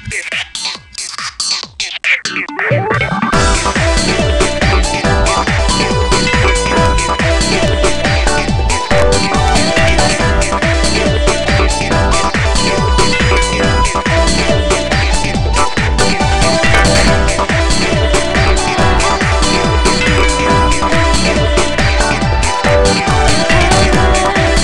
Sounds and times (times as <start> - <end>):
Funk: 0.0 - 24.6
Pop music: 2.9 - 24.6.